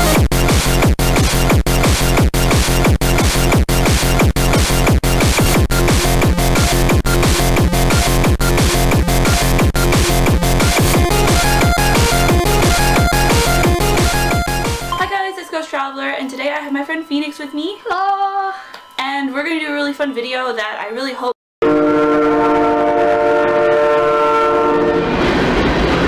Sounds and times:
Music: 0:00.0 - 0:21.4
Speech: 0:15.0 - 0:21.4.

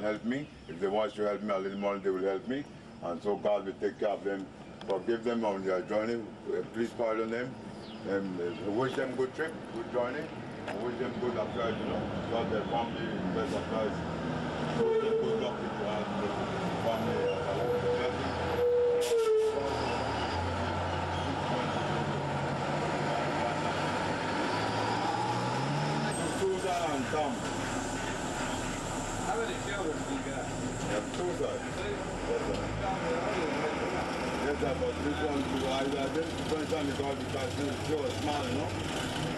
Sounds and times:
Speech: 0:00.0 - 0:14.0, 0:15.2 - 0:18.4, 0:21.2 - 0:22.2, 0:26.1 - 0:27.5, 0:28.4 - 0:38.8.

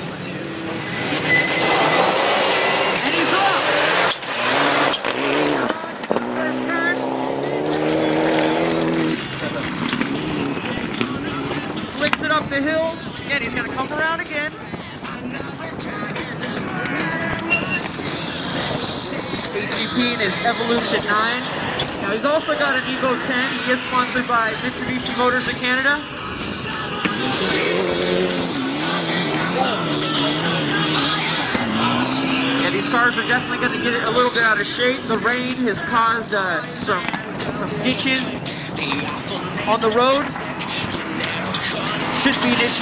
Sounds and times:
Music: 0:05.7 - 0:32.6, 0:37.0 - 0:42.8
Speech: 0:10.6 - 0:16.2, 0:19.4 - 0:26.1, 0:32.6 - 0:42.8.

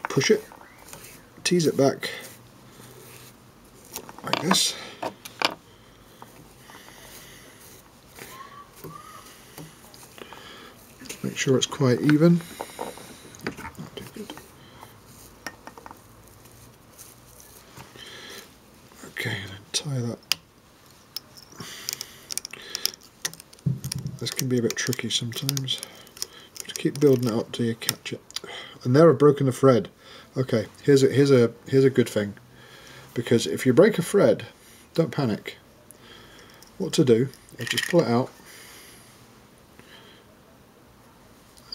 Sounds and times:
Speech: 0:01.4 - 0:02.3, 0:11.1 - 0:12.4, 0:19.0 - 0:20.2, 0:28.8 - 0:32.4, 0:33.2 - 0:35.6, 0:36.8 - 0:38.3.

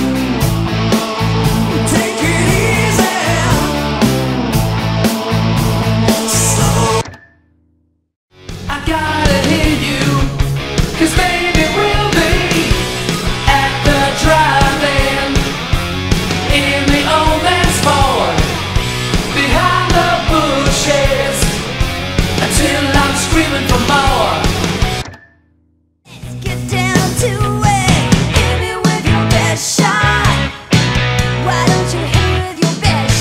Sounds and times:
Electric guitar: 0:00.0 - 0:07.1, 0:08.4 - 0:25.1, 0:26.2 - 0:33.2.

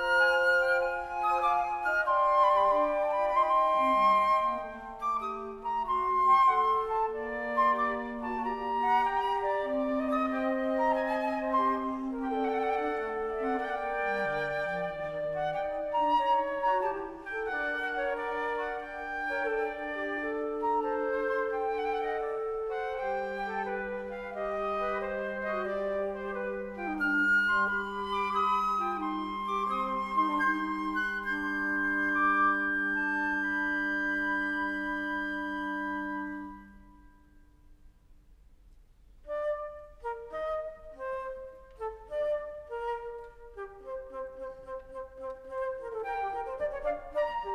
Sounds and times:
Flute: 0:00.0 - 0:38.1, 0:39.1 - 0:47.5
Classical music: 0:00.0 - 0:47.5
Inside, large room or hall: 0:00.0 - 0:47.5.

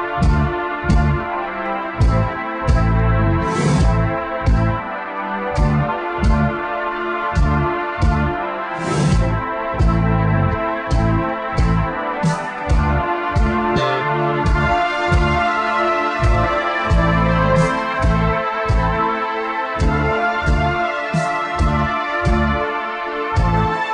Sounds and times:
Music: 0:00.0 - 0:23.9.

